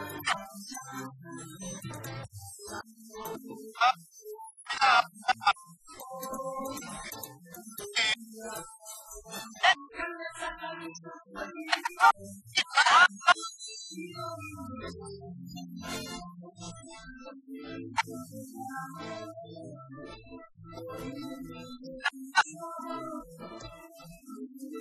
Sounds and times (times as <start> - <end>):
Speech: 0.0 - 2.1, 3.2 - 4.0, 4.7 - 15.0.